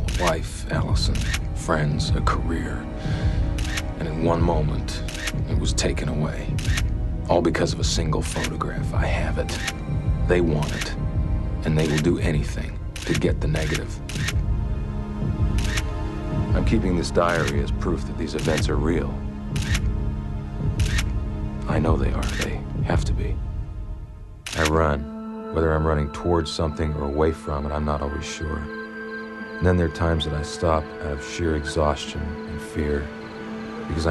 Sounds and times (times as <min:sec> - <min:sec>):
Male speech, man speaking: 0:00.0 - 0:02.8, 0:04.0 - 0:06.6, 0:07.3 - 0:09.6, 0:10.3 - 0:11.0, 0:11.6 - 0:14.0, 0:16.5 - 0:19.2, 0:21.6 - 0:23.4, 0:24.6 - 0:28.7, 0:29.6 - 0:33.1
Music: 0:00.0 - 0:34.1.